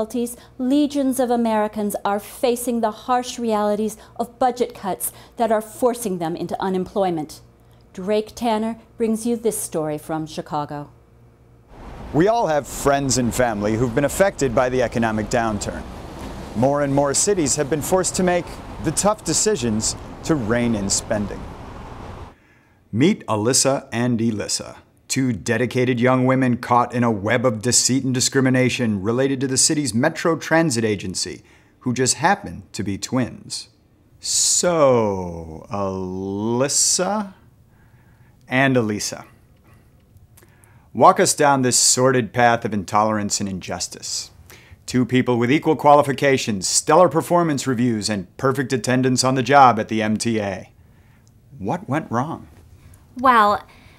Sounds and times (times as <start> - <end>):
Speech: 0.0 - 7.4, 8.0 - 11.0, 12.2 - 15.8, 16.6 - 21.4, 23.0 - 37.4, 38.5 - 39.3, 41.0 - 44.3, 44.9 - 50.7, 51.6 - 52.5, 53.2 - 53.7.